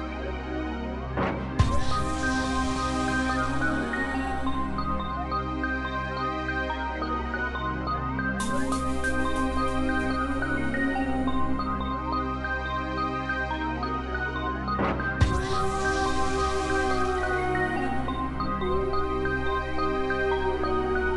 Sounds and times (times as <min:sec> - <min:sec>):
Dubstep: 0:01.6 - 0:05.3, 0:15.1 - 0:21.1.